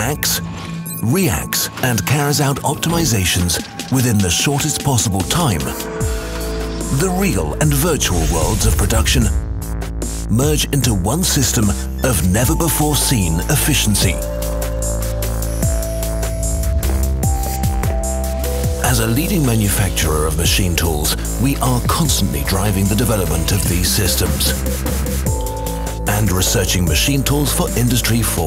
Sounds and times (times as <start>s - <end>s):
Speech: 0.0s - 5.9s, 6.9s - 9.4s, 10.3s - 14.3s, 18.8s - 24.6s, 26.1s - 28.4s
Music: 0.0s - 28.4s.